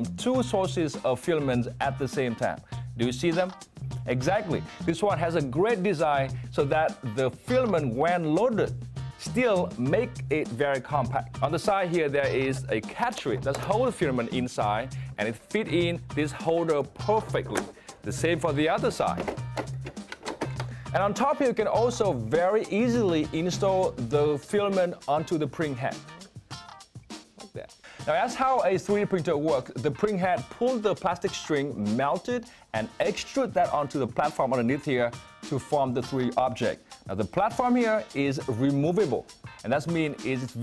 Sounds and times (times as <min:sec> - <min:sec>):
Speech: 0:00.0 - 0:19.3, 0:21.0 - 0:26.1, 0:27.5 - 0:40.6
Music: 0:00.0 - 0:40.6.